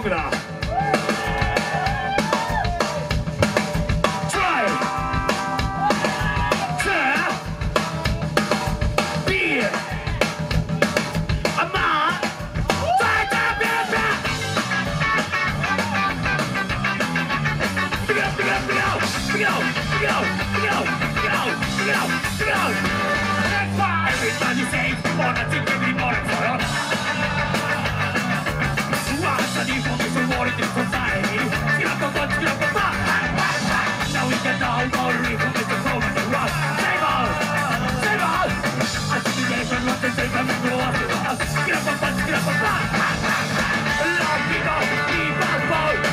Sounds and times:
Speech: 0.0 - 0.5, 4.3 - 4.9, 6.6 - 8.2, 9.3 - 10.0, 11.5 - 12.3
Music: 0.0 - 46.1.

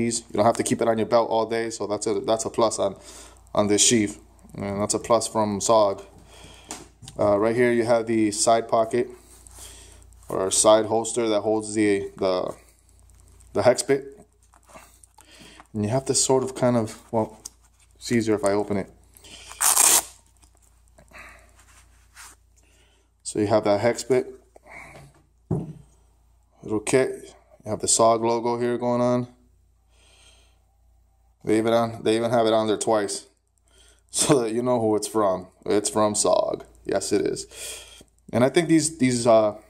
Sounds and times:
Speech: 0.0 - 6.1, 7.1 - 9.2, 10.3 - 12.6, 13.6 - 14.2, 15.8 - 17.4, 18.0 - 19.0, 23.2 - 24.4, 26.6 - 29.4, 31.4 - 33.4, 34.1 - 37.5, 38.3 - 39.7.

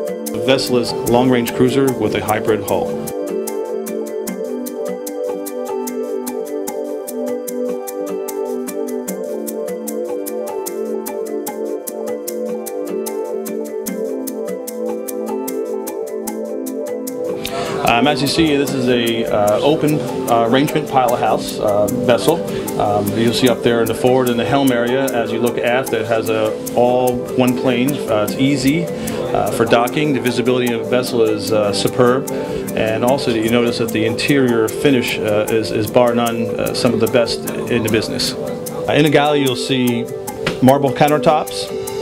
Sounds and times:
Music: 0.0 - 42.0
Speech: 0.4 - 3.0, 17.8 - 41.7.

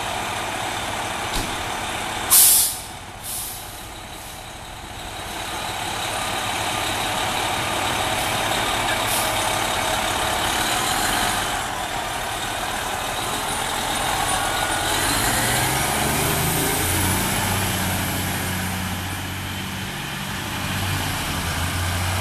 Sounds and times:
Truck: 0.0 - 22.2.

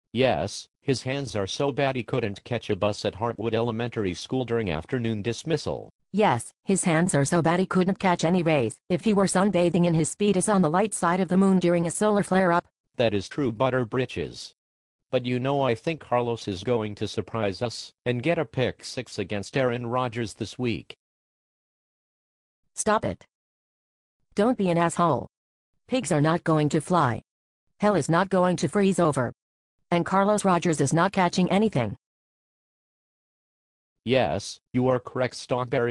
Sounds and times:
Speech synthesizer: 0.2 - 14.6, 15.2 - 21.0, 22.8 - 23.3, 24.4 - 25.3, 25.9 - 32.0, 34.1 - 35.9.

